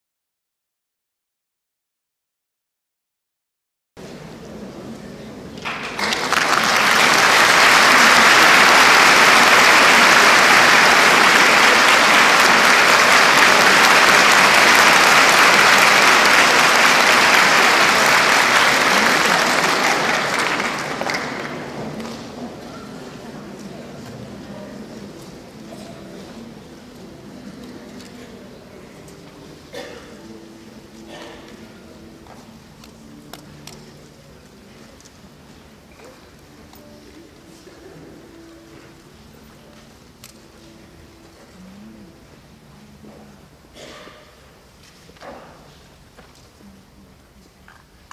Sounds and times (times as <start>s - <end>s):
Speech: 4.0s - 6.2s, 17.3s - 48.1s.